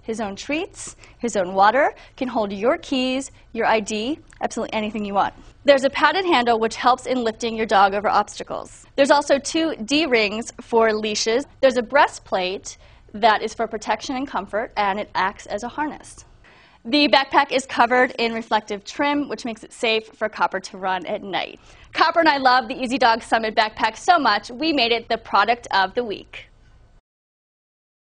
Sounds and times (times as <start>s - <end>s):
Speech: 0.0s - 16.3s, 16.9s - 26.5s.